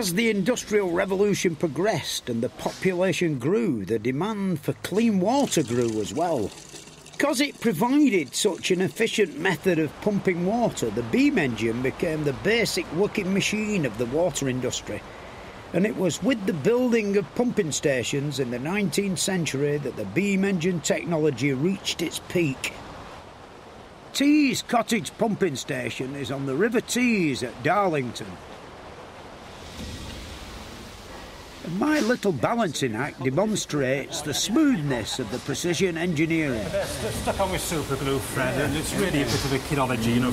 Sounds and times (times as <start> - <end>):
Speech: 0.0 - 6.5, 7.2 - 15.0, 15.8 - 22.8, 24.2 - 28.4, 31.6 - 40.3.